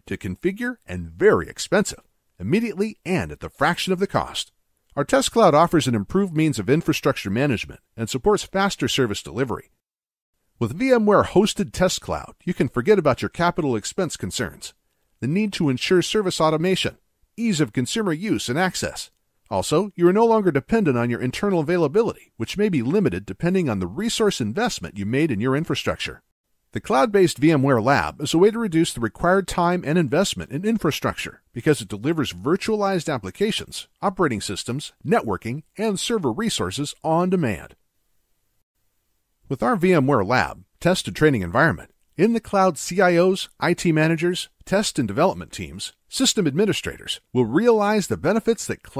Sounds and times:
Narration, monologue: 0.0 - 48.9.

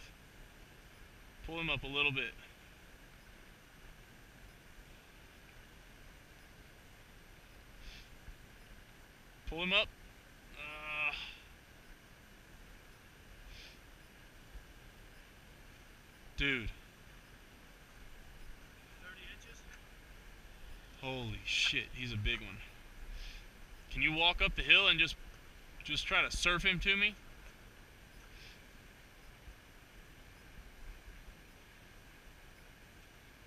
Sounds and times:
Speech: 1.5 - 2.4, 9.5 - 9.9, 16.4 - 16.8, 19.0 - 19.7, 21.0 - 22.7, 23.9 - 25.2, 25.8 - 27.2.

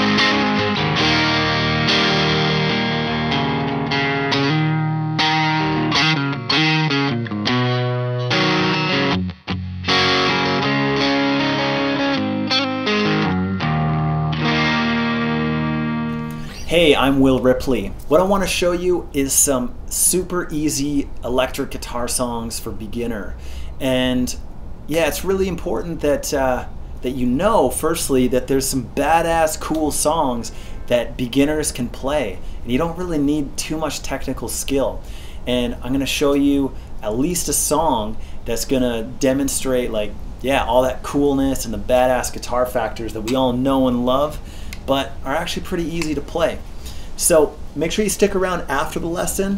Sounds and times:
Electric guitar: 0.0 - 16.7
Speech: 16.6 - 46.6, 47.2 - 49.5.

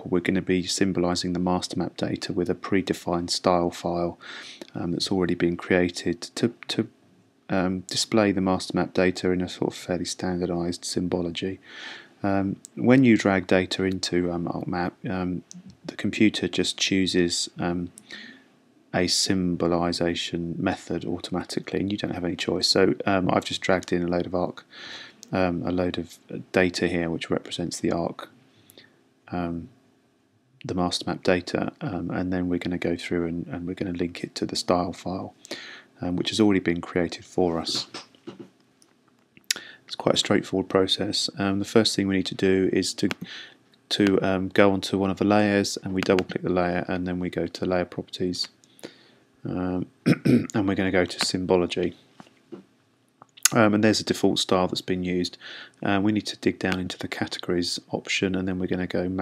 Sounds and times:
Speech: 0.0 - 11.6, 12.2 - 18.3, 18.9 - 28.4, 29.3 - 29.8, 30.6 - 35.4, 36.0 - 38.1, 39.5 - 48.6, 49.4 - 52.0, 53.4 - 59.2.

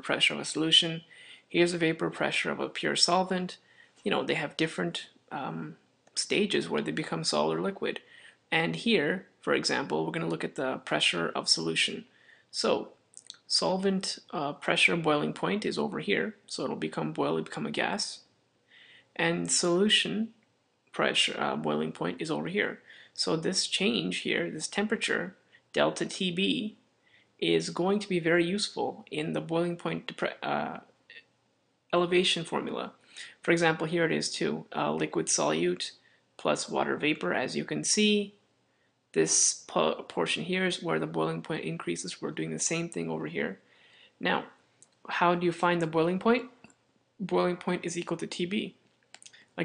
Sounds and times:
Speech: 0.0 - 18.3, 19.2 - 26.8, 27.4 - 31.3, 32.0 - 38.4, 39.2 - 43.6, 44.2 - 48.8.

